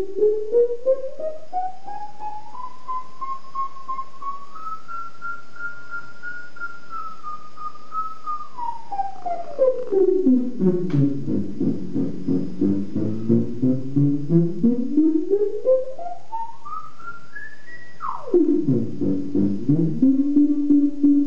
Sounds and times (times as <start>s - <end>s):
Theremin: 0.0s - 21.2s.